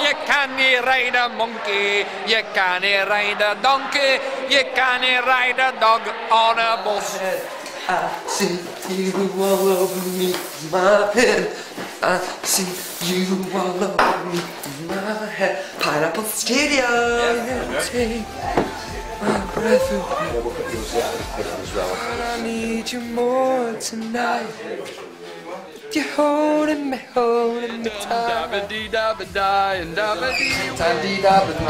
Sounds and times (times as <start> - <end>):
Male singing: 0.0 - 25.0, 25.8 - 31.7
Music: 12.5 - 24.5, 27.6 - 31.7.